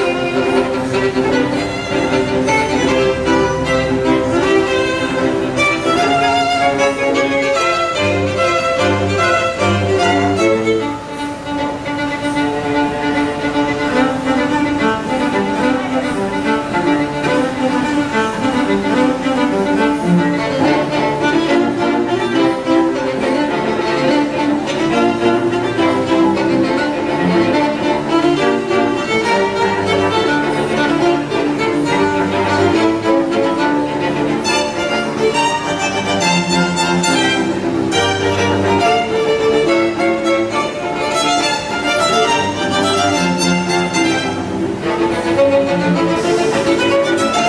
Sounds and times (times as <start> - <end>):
Cello: 0.0 - 47.4
Double bass: 0.0 - 47.4
String section: 0.0 - 47.4
Violin, fiddle: 0.0 - 47.4.